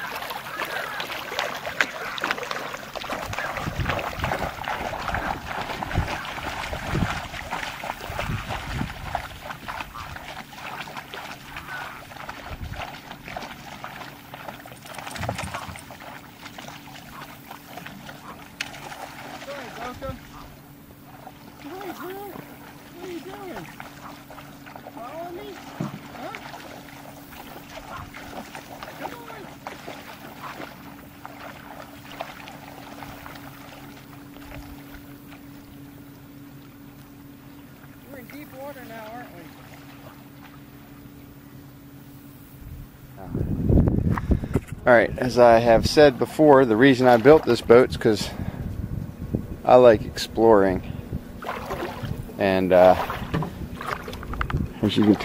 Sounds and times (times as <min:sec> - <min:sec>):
Boat, Water vehicle: 0:00.0 - 0:55.2
Outside, rural or natural: 0:00.0 - 0:55.2.